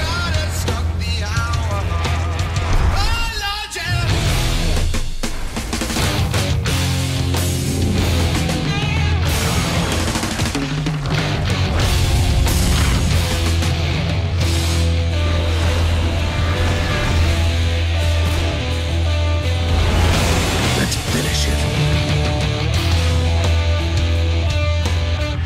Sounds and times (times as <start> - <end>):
Music: 0.0 - 25.4
Speech: 20.8 - 21.9.